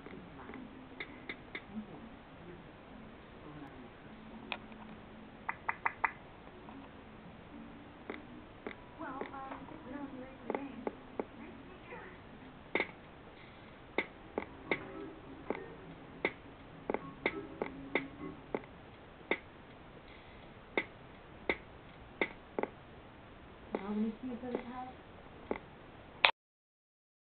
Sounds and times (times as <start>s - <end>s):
Music: 14.2s - 18.6s
Speech: 23.8s - 25.0s.